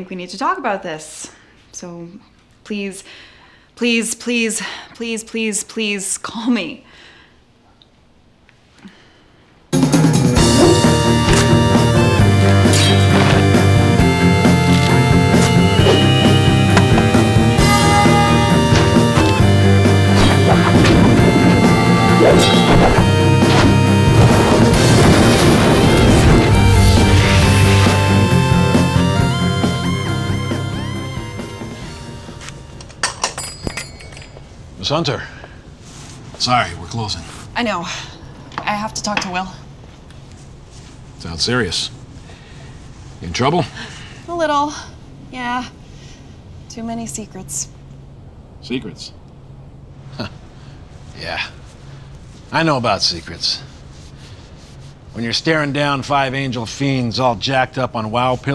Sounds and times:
Music: 9.8s - 33.3s.

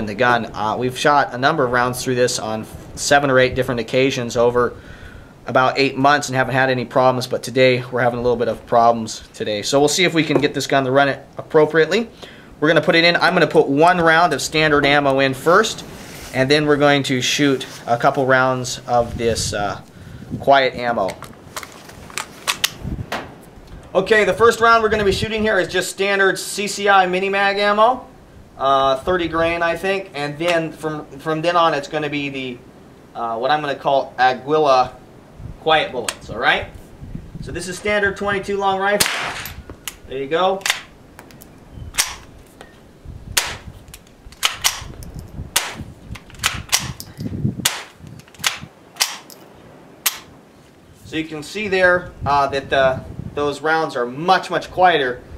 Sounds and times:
Cap gun: 39.0s - 39.5s, 42.0s - 42.2s, 43.4s - 43.6s, 44.4s - 44.9s, 45.6s - 45.8s, 46.4s - 47.0s, 47.6s - 49.3s.

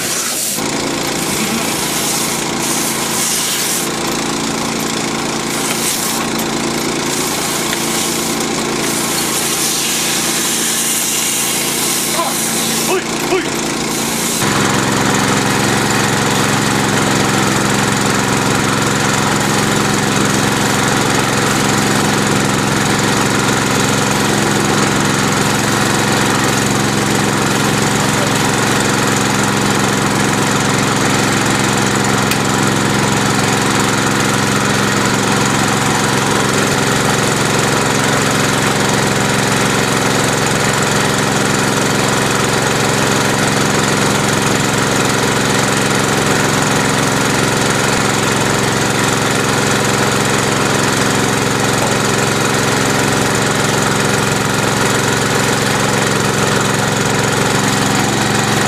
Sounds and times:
Vibration: 0.0s - 43.7s.

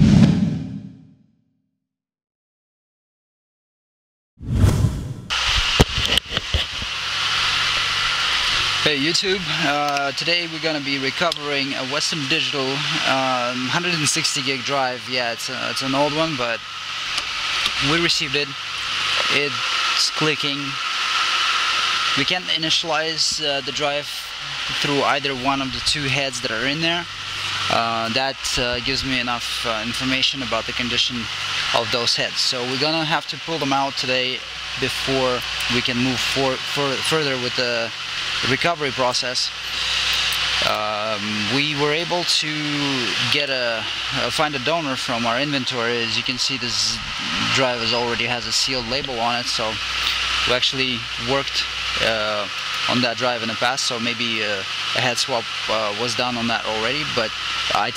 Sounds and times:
Speech: 8.8s - 16.6s, 17.8s - 18.6s, 19.2s - 20.8s, 22.2s - 39.6s, 40.6s - 49.8s, 50.4s - 57.9s.

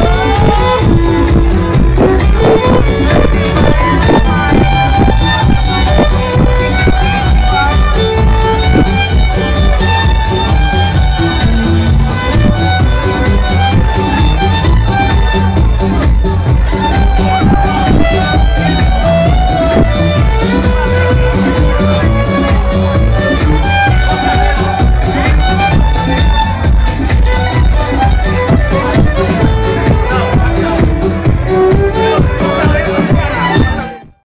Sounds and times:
Violin, fiddle: 0.0s - 34.2s
Speech: 28.7s - 31.0s, 32.0s - 34.0s.

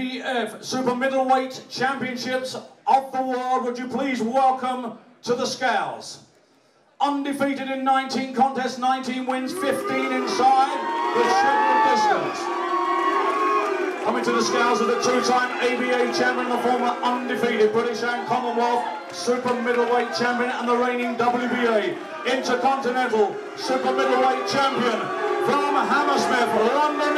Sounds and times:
Male speech, man speaking: 0.0s - 6.3s, 7.0s - 12.5s, 14.0s - 27.1s.

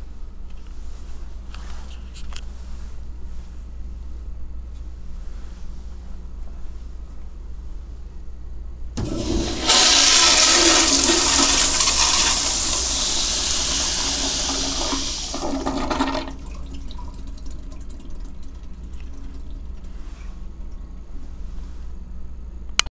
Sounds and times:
Inside, small room: 0.0s - 22.9s
Toilet flush: 9.0s - 20.0s.

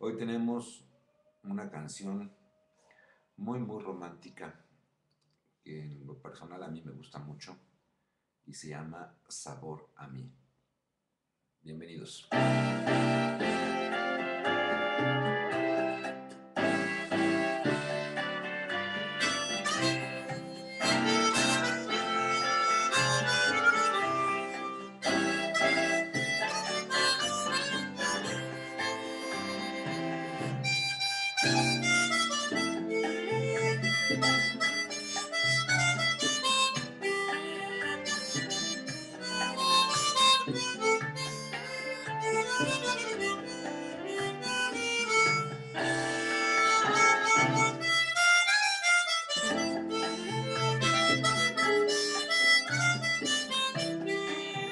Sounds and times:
Harmonica: 12.3s - 54.7s.

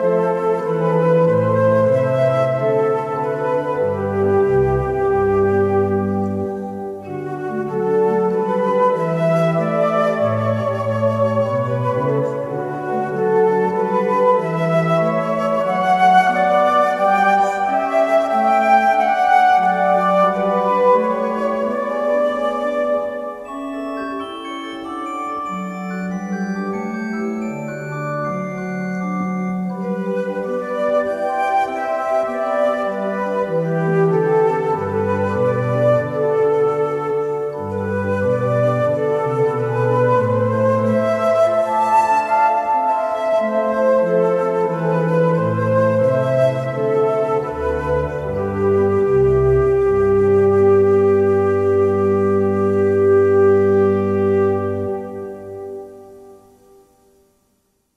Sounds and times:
Flute: 0.0s - 57.2s.

